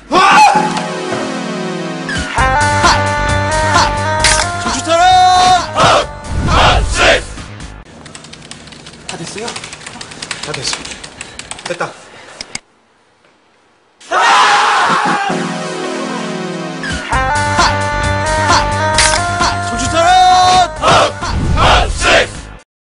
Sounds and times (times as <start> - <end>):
Music: 0.0 - 7.9, 14.8 - 22.6.